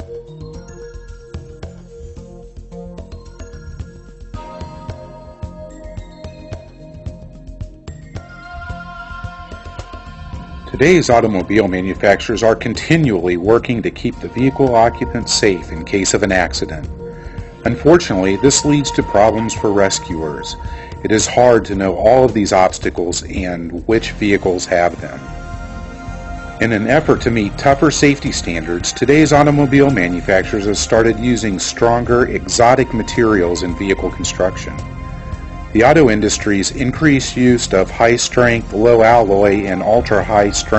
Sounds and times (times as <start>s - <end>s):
Music: 0.0s - 40.7s
Speech: 10.7s - 16.9s, 17.7s - 25.2s, 26.6s - 34.8s, 35.8s - 40.7s.